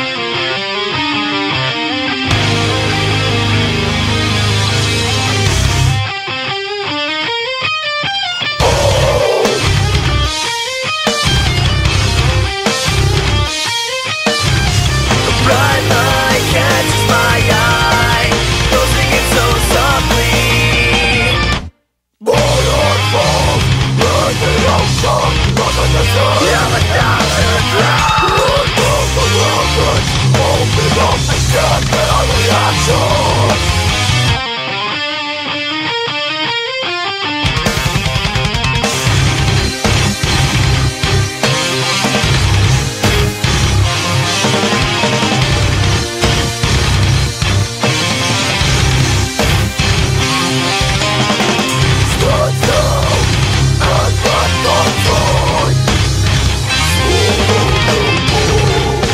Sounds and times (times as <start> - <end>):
Music: 0.0 - 59.1.